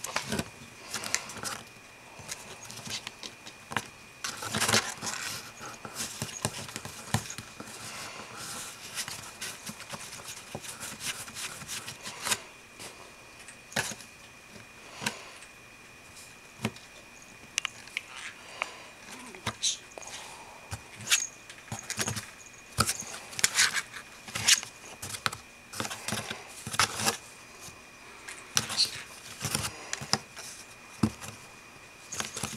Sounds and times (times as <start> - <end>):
Inside, small room: 0.0 - 32.5.